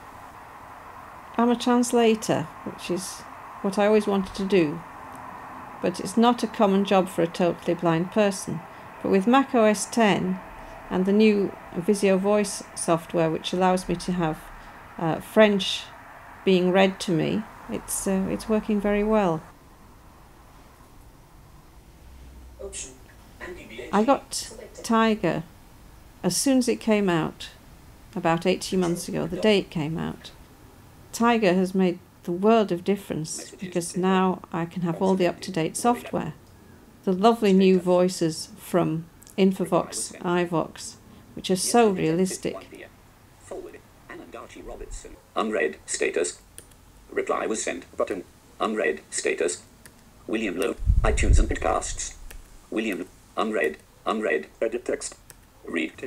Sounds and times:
Speech: 1.4 - 4.8, 5.8 - 15.9, 16.5 - 19.5, 22.6 - 25.5, 26.3 - 27.6, 28.2 - 30.4, 31.2 - 36.4, 37.1 - 46.4, 47.1 - 49.6, 50.3 - 52.2, 52.8 - 56.0.

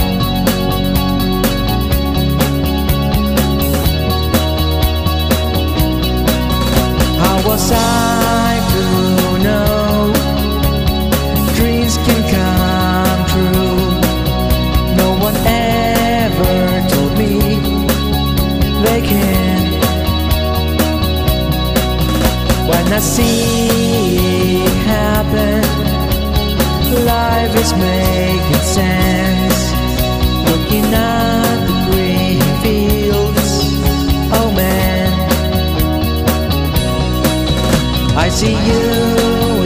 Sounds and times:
Music: 0.0 - 39.6.

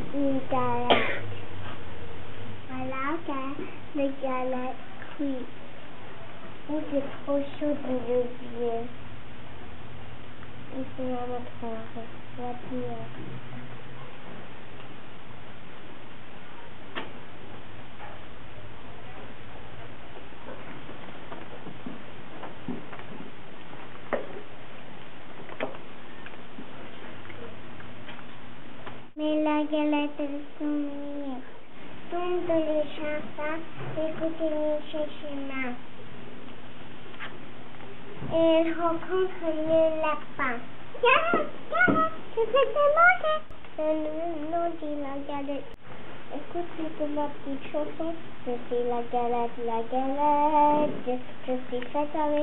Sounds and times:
Child speech, kid speaking: 0.0 - 1.2, 2.7 - 5.5, 6.7 - 9.0, 10.7 - 13.2, 32.2 - 35.8, 38.3 - 45.7.

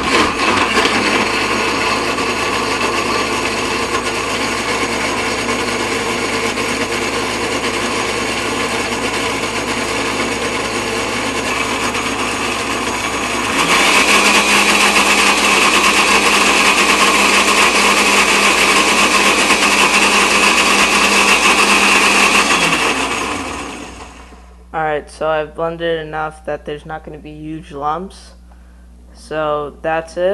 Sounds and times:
Blender: 0.0 - 24.5.

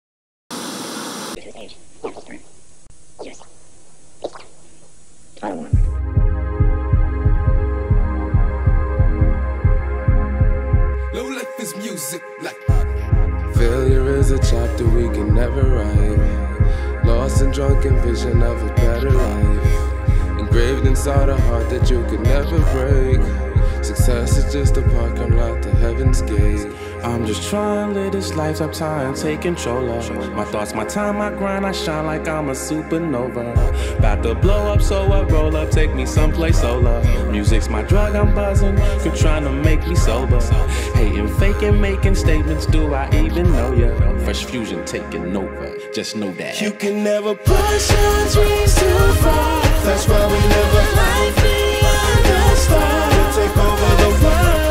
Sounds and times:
White noise: 0.5 - 5.8
Speech: 1.4 - 2.4, 5.4 - 5.8, 11.1 - 12.6, 41.0 - 47.2
Music: 5.7 - 54.7.

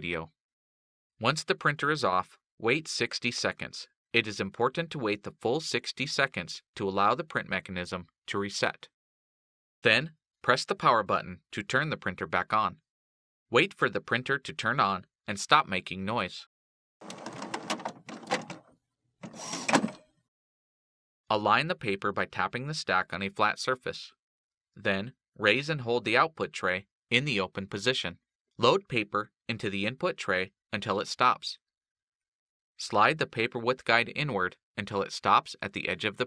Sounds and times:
Speech: 0.0 - 0.4, 1.2 - 8.9, 9.8 - 12.8, 13.5 - 16.5, 21.3 - 24.2, 24.8 - 31.6, 32.8 - 36.2.

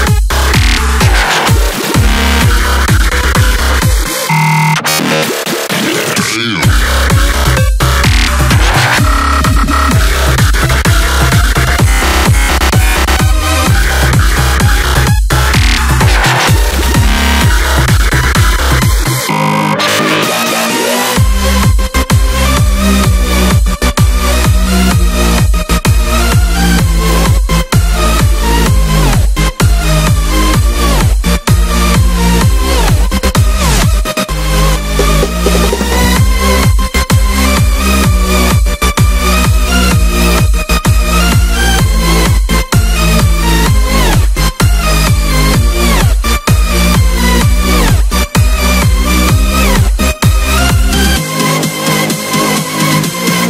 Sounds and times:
Electronic dance music: 0.0 - 53.5.

